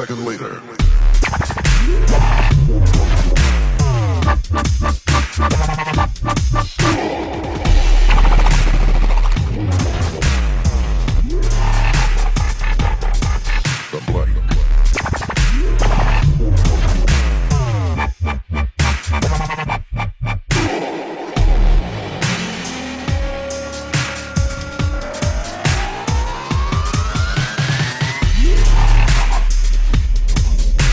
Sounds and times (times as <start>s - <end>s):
Dubstep: 0.8s - 30.9s.